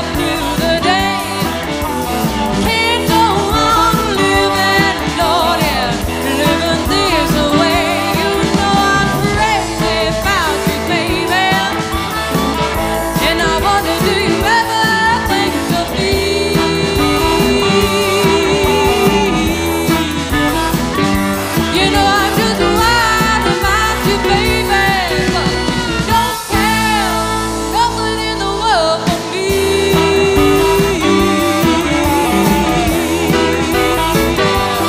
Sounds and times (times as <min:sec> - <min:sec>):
Electric guitar: 0:00.0 - 0:34.8.